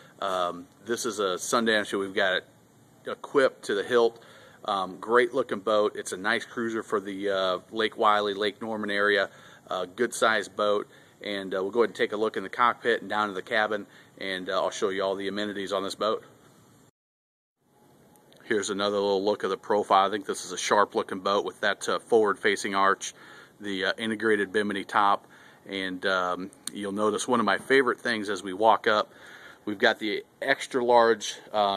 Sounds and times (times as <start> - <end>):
Speech: 0.2 - 16.3, 18.4 - 31.7.